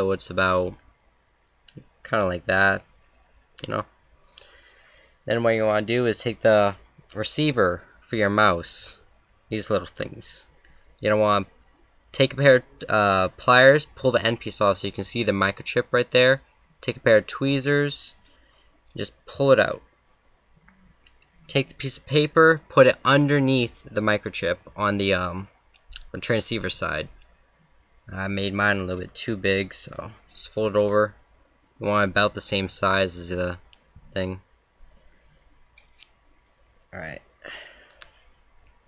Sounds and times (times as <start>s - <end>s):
Speech: 0.0s - 0.8s, 1.7s - 2.9s, 3.6s - 3.9s, 5.3s - 11.5s, 12.1s - 18.2s, 18.9s - 19.9s, 21.5s - 27.2s, 28.1s - 31.2s, 31.8s - 34.5s, 36.9s - 37.3s.